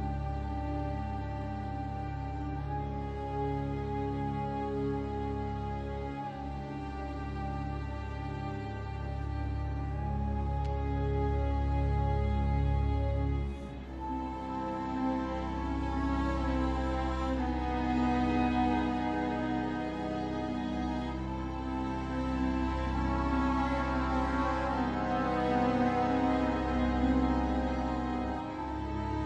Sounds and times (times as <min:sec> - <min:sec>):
Music: 0:00.0 - 0:29.2.